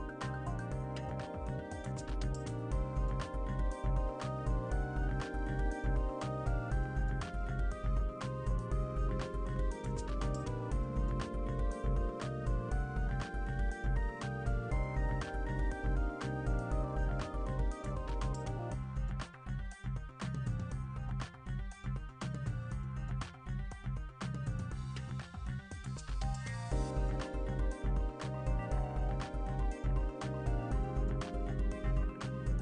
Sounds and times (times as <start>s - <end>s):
Music: 0.0s - 32.6s.